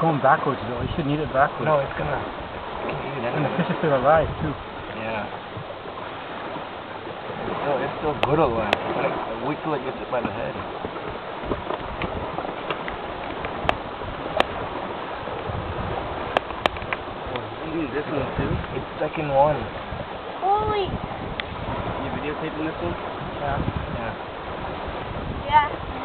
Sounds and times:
Outside, rural or natural: 0.0s - 26.0s.

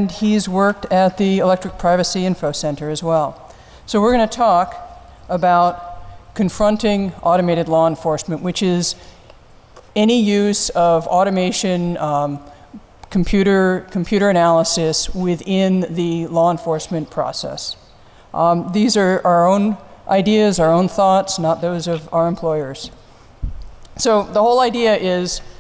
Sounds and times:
Speech: 0.0s - 9.0s, 10.0s - 12.5s, 13.1s - 17.8s, 18.4s - 23.0s, 24.0s - 25.6s.

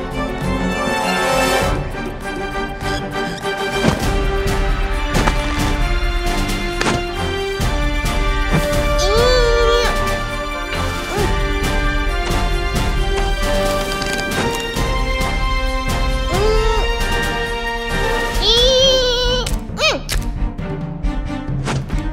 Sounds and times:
Music: 0.0s - 22.1s.

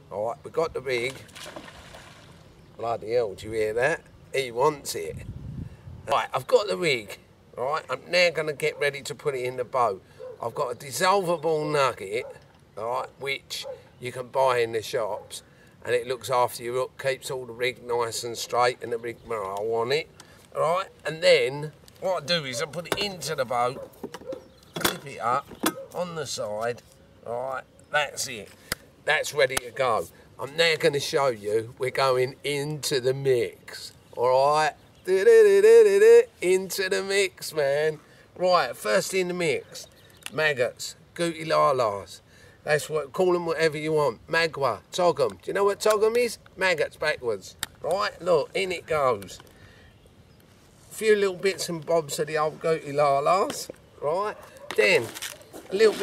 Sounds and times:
Speech: 0.0s - 1.3s, 2.8s - 5.2s, 6.1s - 23.9s, 24.8s - 49.4s, 50.9s - 56.0s.

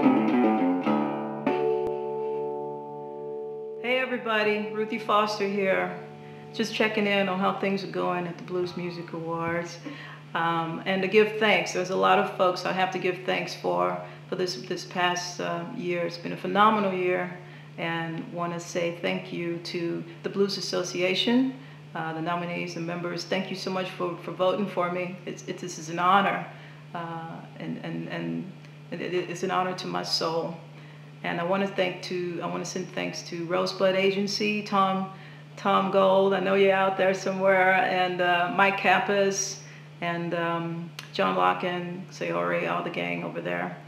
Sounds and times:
Female speech, woman speaking: 3.8s - 43.8s
Narration, monologue: 3.8s - 43.8s.

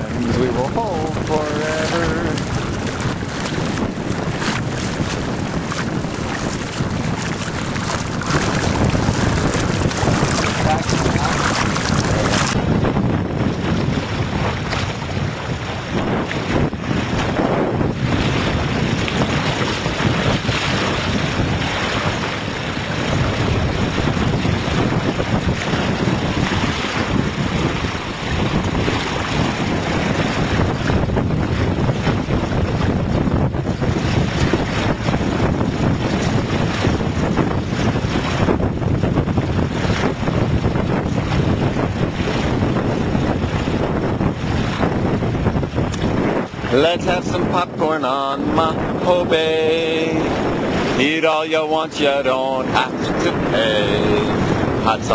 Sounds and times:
Boat, Water vehicle: 0.0s - 55.1s
Outside, rural or natural: 0.0s - 55.1s.

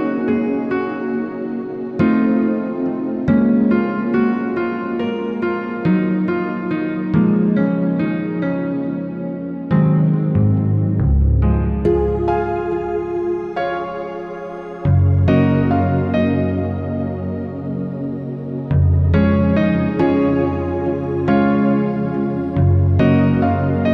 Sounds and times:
Classical music: 0.0s - 23.9s.

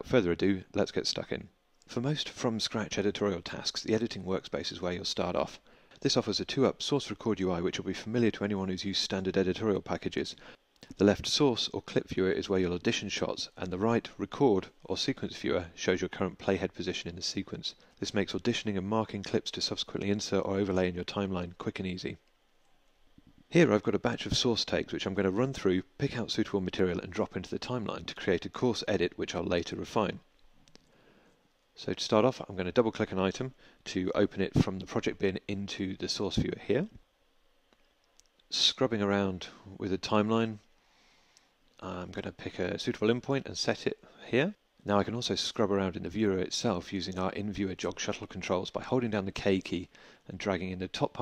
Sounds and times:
Speech: 0.0s - 22.2s, 23.5s - 30.3s, 31.8s - 37.0s, 38.5s - 40.7s, 41.8s - 51.2s.

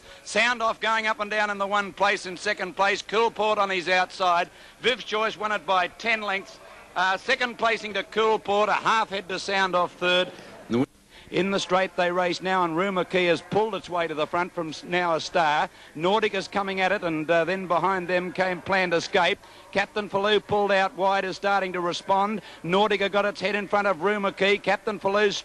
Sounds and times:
Speech: 0.3s - 25.4s.

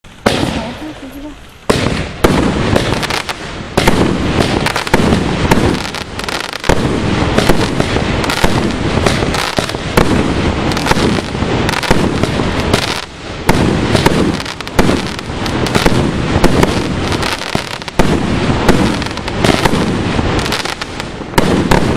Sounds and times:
Firecracker: 0.1s - 21.9s
Speech: 0.5s - 1.4s.

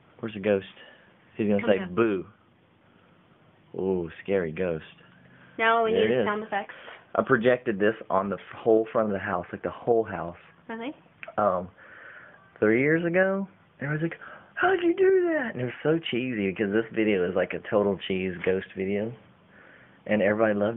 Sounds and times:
Conversation: 0.0s - 20.7s.

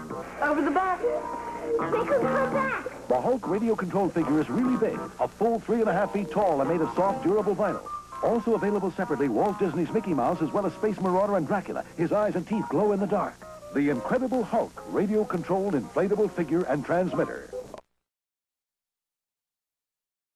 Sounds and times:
Music: 0.0s - 17.8s
Speech: 1.8s - 17.5s.

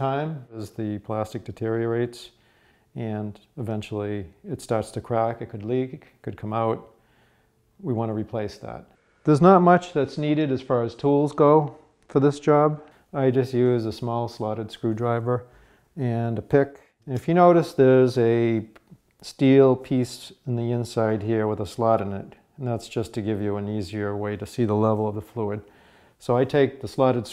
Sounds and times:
Speech: 0.0s - 2.4s, 3.0s - 7.0s, 7.8s - 27.3s.

